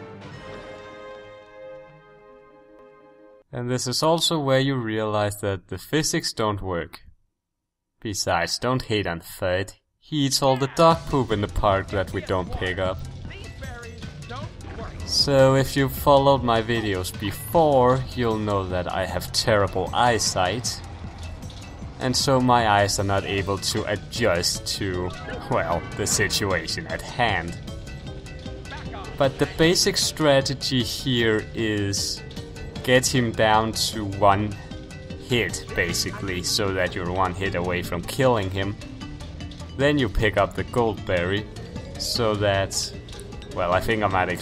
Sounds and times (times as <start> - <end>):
Music: 0.0 - 5.2, 10.1 - 44.4
Speech: 3.5 - 7.1, 8.0 - 20.8, 22.0 - 27.6, 28.7 - 32.2, 32.9 - 34.6, 35.3 - 38.8, 39.8 - 44.4.